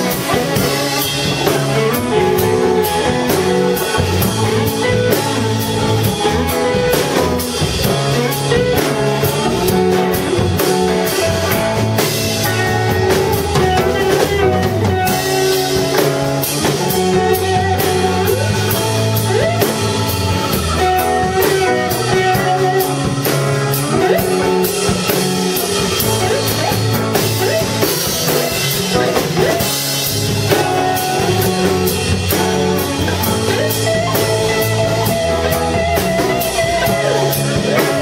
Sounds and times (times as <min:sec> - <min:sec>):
Blues: 0:00.0 - 0:38.0.